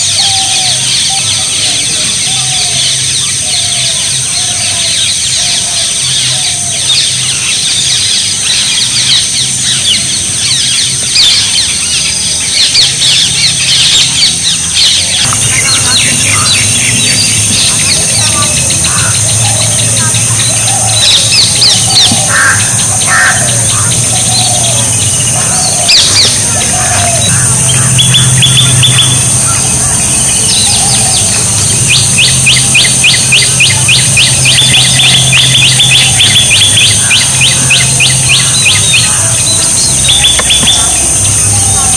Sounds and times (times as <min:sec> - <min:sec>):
Bird: 0:00.0 - 0:41.9.